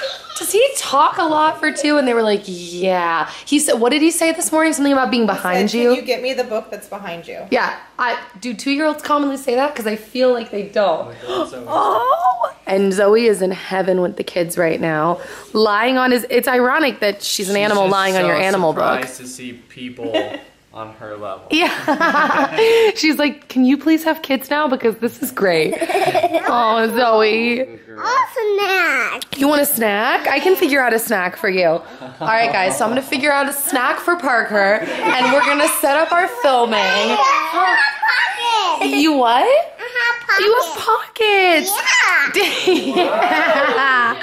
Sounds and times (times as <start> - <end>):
Giggle: 20.0 - 20.6, 21.5 - 23.0, 25.6 - 26.6, 42.4 - 44.2
Child speech, kid speaking: 28.0 - 29.4, 34.9 - 42.4.